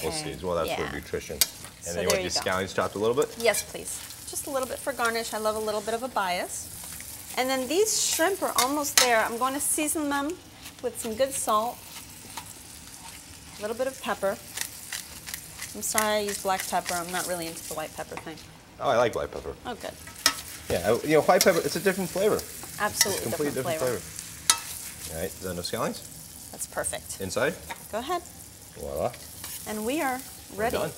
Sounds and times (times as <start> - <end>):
Frying (food): 0.0 - 30.9
Sizzle: 0.0 - 30.9.